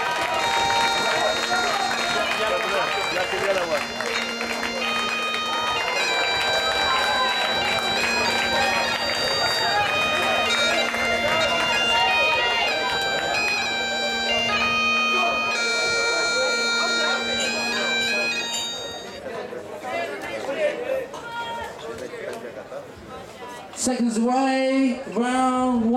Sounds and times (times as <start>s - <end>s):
Bagpipes: 0.0s - 19.4s.